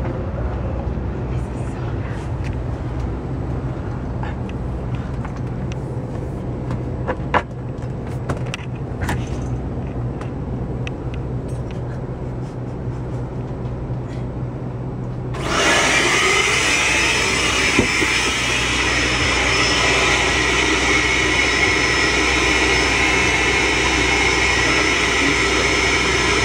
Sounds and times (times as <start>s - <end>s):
Aircraft engine: 0.0s - 26.4s.